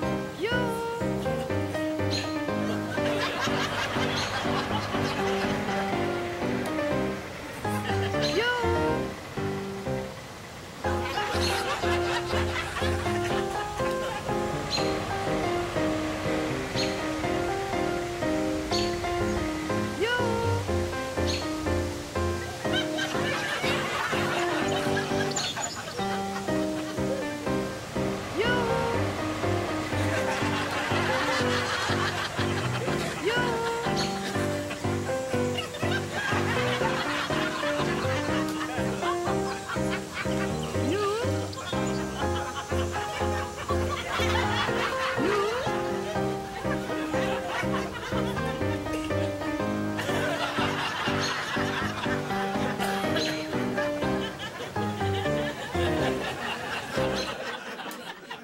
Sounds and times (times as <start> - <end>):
Laughter: 2.6 - 5.8, 11.0 - 14.3, 22.4 - 27.2, 30.0 - 34.9, 35.5 - 40.7, 41.5 - 49.1, 50.0 - 53.5, 54.2 - 58.4.